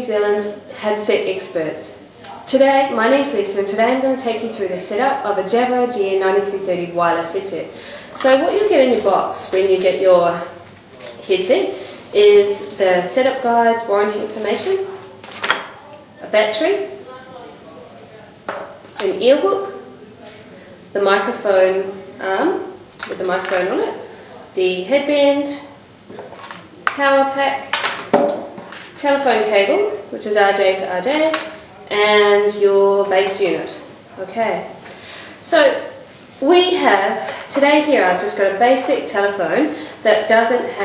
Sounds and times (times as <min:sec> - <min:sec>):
Speech: 0:00.0 - 0:15.2, 0:15.8 - 0:27.7, 0:29.0 - 0:34.8, 0:35.4 - 0:40.8.